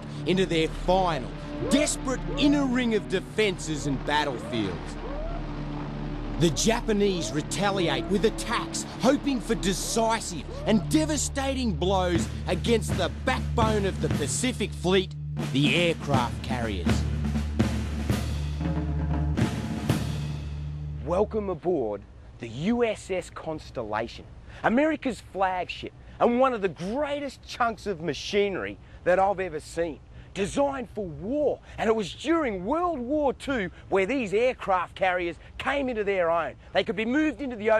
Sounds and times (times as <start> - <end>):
Timpani: 15.4 - 21.2.